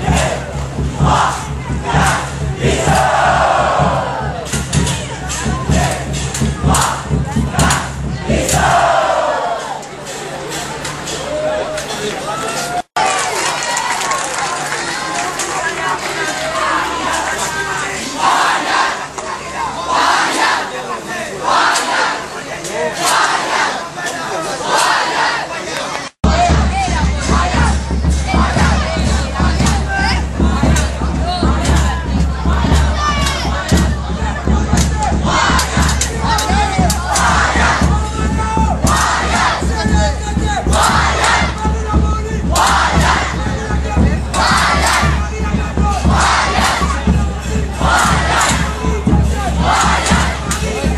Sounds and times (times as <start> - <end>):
Music: 0.0 - 9.0, 26.3 - 50.9
Speech: 0.0 - 50.9.